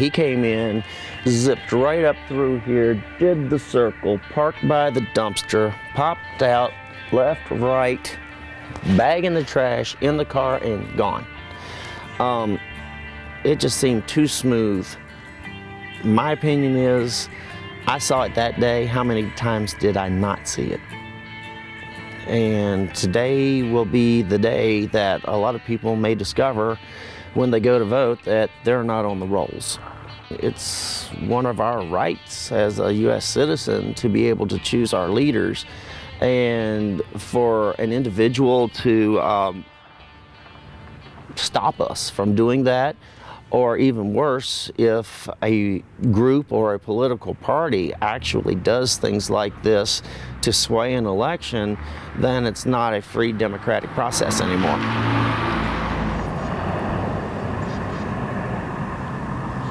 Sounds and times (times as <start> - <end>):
Speech: 0.0 - 8.2, 8.8 - 11.3, 12.2 - 12.6, 13.4 - 15.0, 16.0 - 17.3, 17.9 - 20.8, 22.3 - 26.8, 27.4 - 39.6, 41.3 - 54.9
Outside, urban or manmade: 0.0 - 59.7.